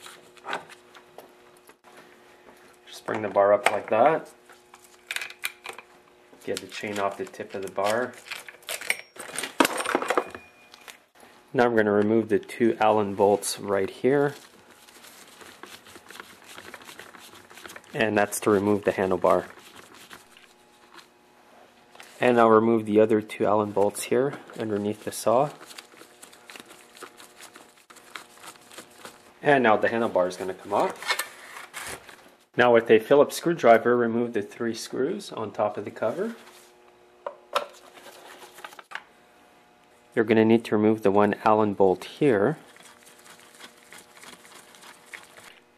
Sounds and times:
Speech: 2.9s - 4.4s, 6.4s - 8.2s, 11.6s - 14.4s, 18.0s - 19.5s, 22.2s - 25.6s, 29.4s - 31.0s, 32.6s - 36.5s, 40.2s - 42.6s.

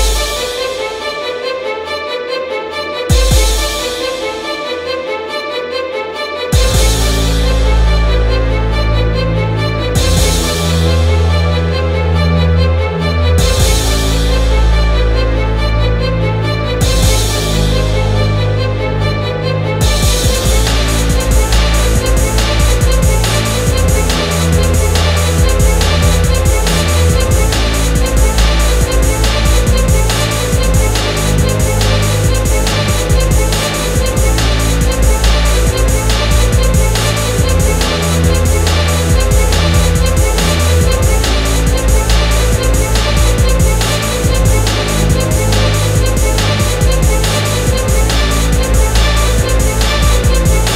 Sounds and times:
Electronica: 6.5s - 50.7s.

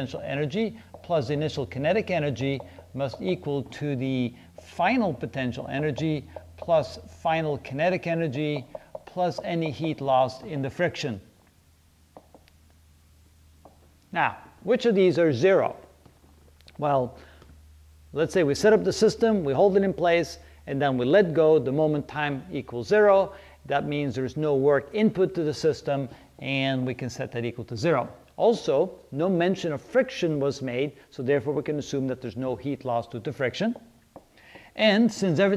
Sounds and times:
Speech: 0.0s - 11.3s, 14.1s - 15.9s, 16.8s - 17.2s, 18.2s - 33.9s, 34.8s - 35.5s.

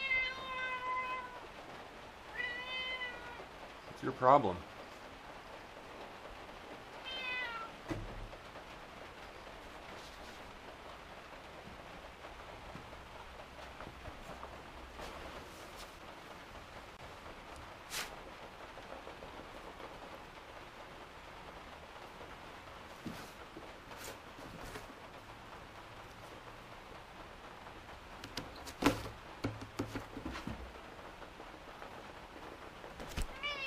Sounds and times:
Cat: 0.0s - 1.5s, 2.3s - 3.5s, 7.0s - 7.8s, 33.2s - 33.6s.

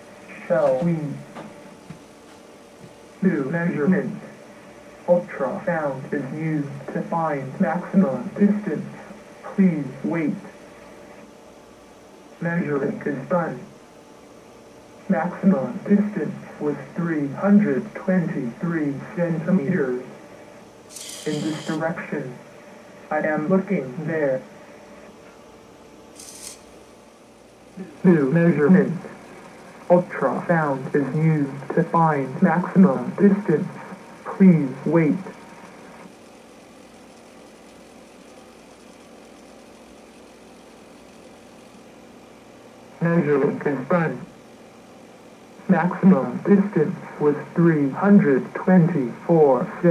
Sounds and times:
Radio: 0.2s - 1.6s, 3.2s - 11.3s, 12.4s - 13.8s, 15.0s - 25.4s, 27.7s - 41.8s, 42.9s - 44.4s, 45.6s - 49.9s
Speech: 0.3s - 1.4s, 3.2s - 4.4s, 5.1s - 10.6s, 12.4s - 13.8s, 15.0s - 20.2s, 21.2s - 22.5s, 23.1s - 24.5s, 27.8s - 29.2s, 29.8s - 35.4s, 43.0s - 44.4s, 45.6s - 49.9s.

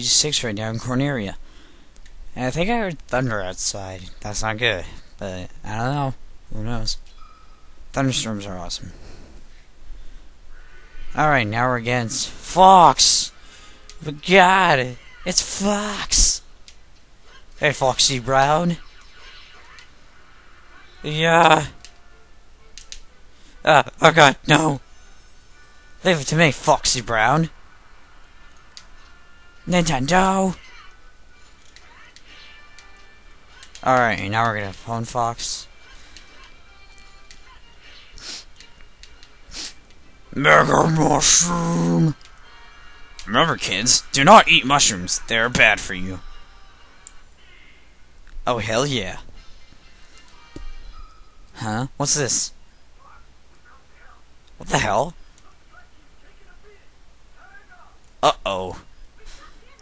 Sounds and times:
Music: 13.1s - 15.3s, 19.8s - 26.2s, 27.0s - 51.6s.

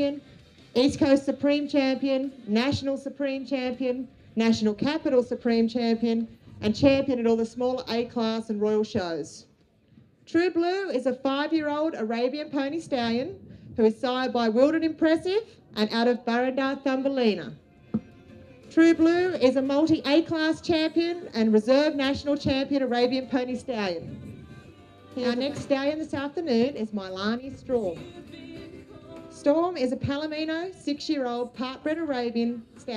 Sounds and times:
Speech: 0.8s - 9.4s, 10.3s - 17.6s, 18.8s - 24.1s, 25.2s - 28.0s, 29.4s - 32.9s.

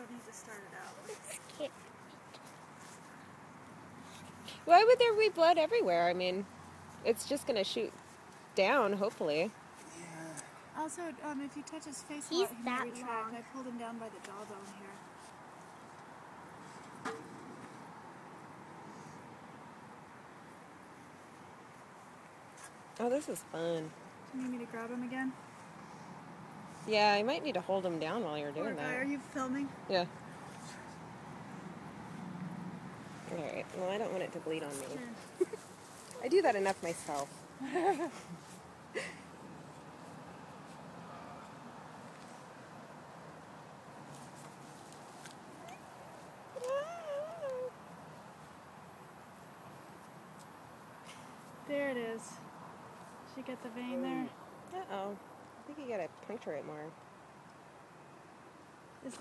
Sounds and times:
Speech: 10.0s - 15.0s, 53.7s - 55.1s.

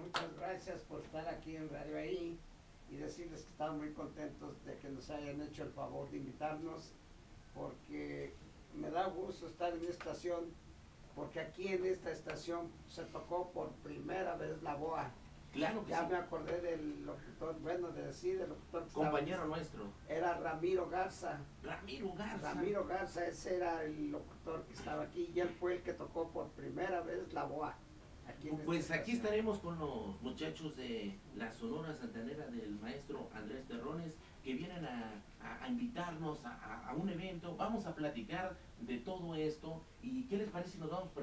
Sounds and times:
Speech: 0.0s - 7.0s, 7.6s - 10.6s, 11.2s - 41.2s.

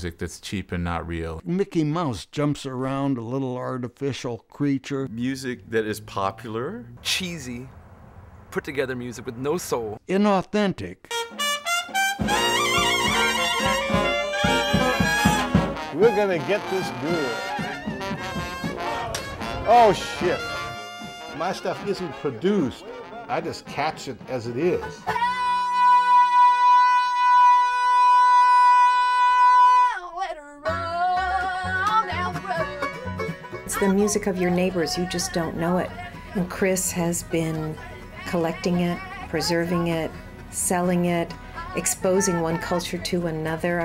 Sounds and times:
Music: 11.1s - 43.8s.

